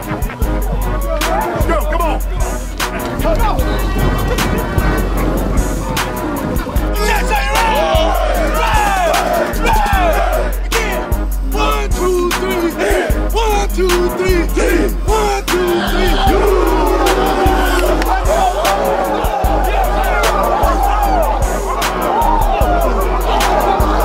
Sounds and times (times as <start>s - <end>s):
Crowd: 0.0s - 24.0s.